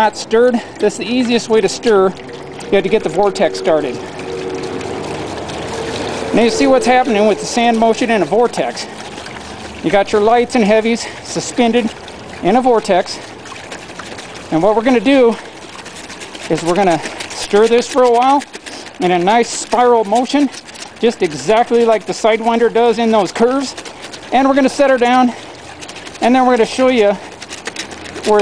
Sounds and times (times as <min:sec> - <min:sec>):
Liquid: 0:00.0 - 0:28.4
Outside, rural or natural: 0:00.0 - 0:28.4
Speech: 0:02.7 - 0:04.0, 0:06.4 - 0:08.8, 0:19.0 - 0:25.4, 0:26.2 - 0:27.2.